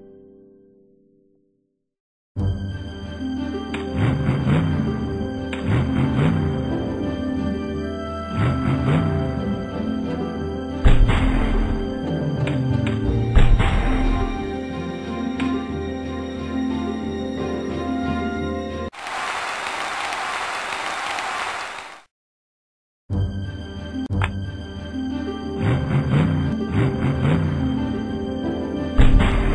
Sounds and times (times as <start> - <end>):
Music: 0.0 - 1.8, 2.4 - 18.9, 23.1 - 29.5.